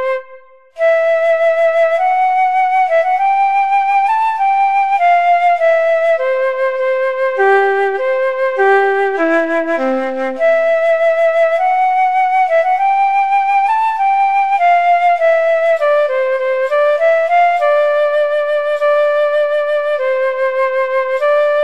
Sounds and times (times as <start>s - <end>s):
Flute: 0.0s - 21.6s.